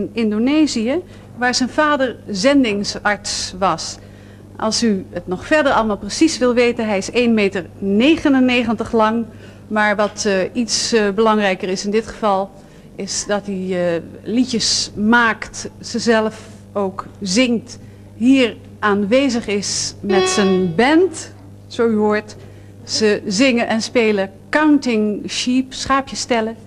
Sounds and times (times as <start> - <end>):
Speech: 0.0 - 4.0, 4.6 - 26.6.